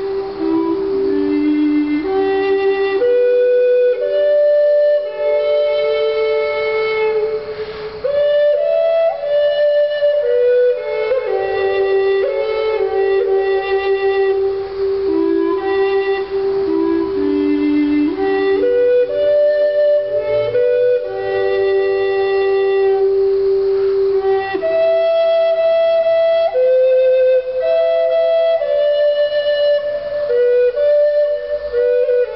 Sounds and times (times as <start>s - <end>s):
Flute: 0.0s - 32.3s.